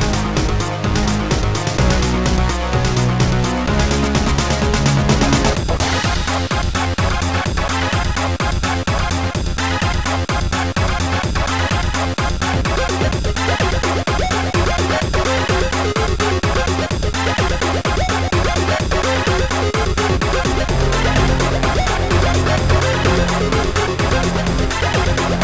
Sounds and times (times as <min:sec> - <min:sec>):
Theme music: 0:00.0 - 0:06.5, 0:18.2 - 0:25.4
Rhythm and blues: 0:00.0 - 0:25.4.